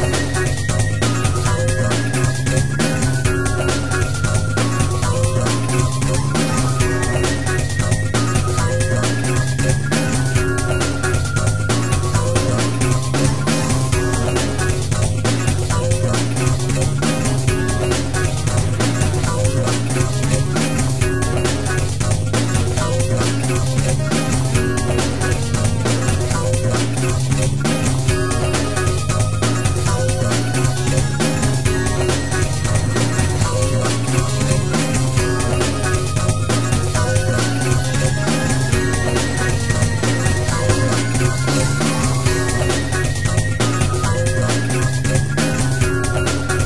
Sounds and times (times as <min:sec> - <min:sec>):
Funny music: 0:00.0 - 0:46.6.